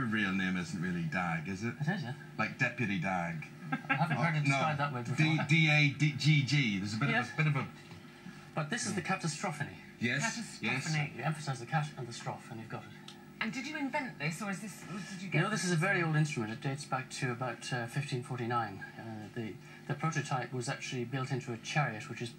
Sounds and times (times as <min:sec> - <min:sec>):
Speech: 0:00.0 - 0:07.7, 0:08.6 - 0:22.3.